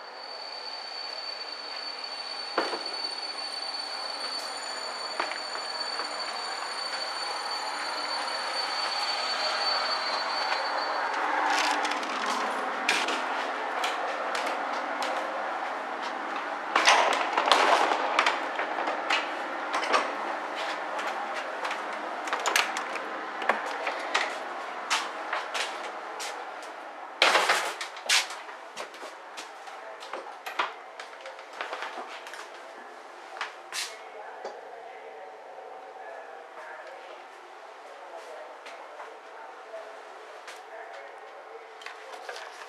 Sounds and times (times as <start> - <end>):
Railroad car, train wagon: 0.0 - 42.6
Train: 0.0 - 42.6.